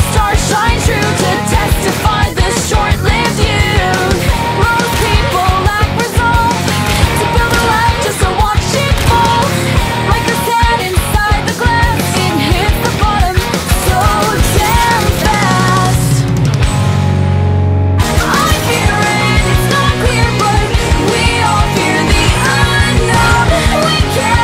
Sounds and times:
Grunge: 0:00.0 - 0:24.4.

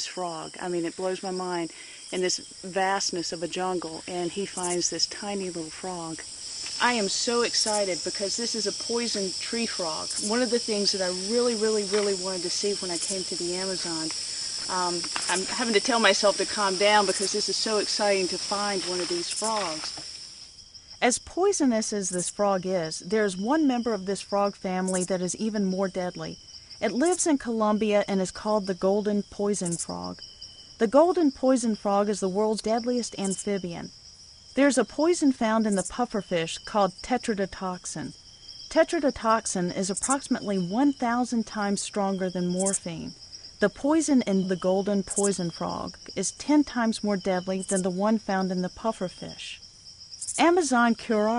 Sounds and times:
Speech: 0:00.0 - 0:06.2, 0:06.8 - 0:20.0, 0:21.0 - 0:30.2, 0:30.8 - 0:33.9, 0:34.6 - 0:38.1, 0:38.7 - 0:49.6, 0:50.4 - 0:51.3
Frog: 0:21.0 - 0:34.0, 0:34.6 - 0:51.3.

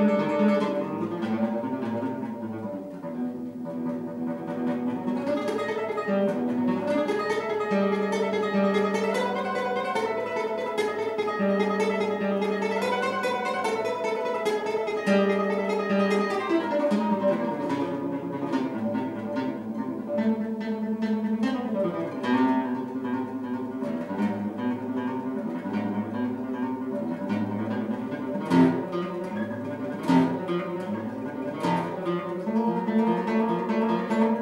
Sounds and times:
Guitar: 0:00.0 - 0:34.4.

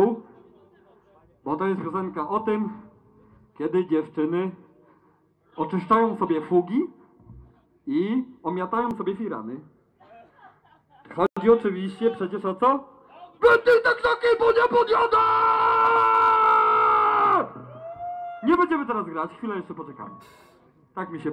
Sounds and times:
Speech: 0:00.0 - 0:02.8, 0:03.6 - 0:04.6, 0:05.6 - 0:06.9, 0:07.9 - 0:15.3, 0:18.4 - 0:20.2, 0:21.0 - 0:21.3.

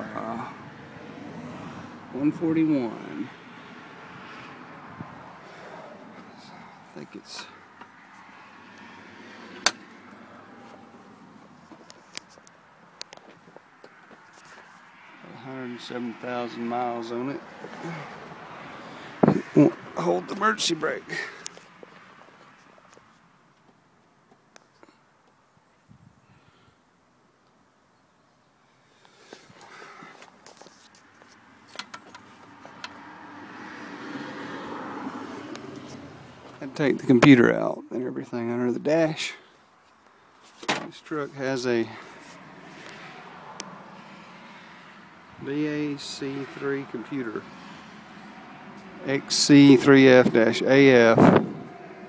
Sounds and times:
Vehicle: 0:00.0 - 0:52.0
Speech: 0:02.1 - 0:03.3, 0:06.4 - 0:07.6, 0:15.3 - 0:17.4, 0:19.6 - 0:21.4, 0:36.6 - 0:39.4, 0:40.9 - 0:42.0, 0:45.4 - 0:47.4, 0:49.0 - 0:51.3.

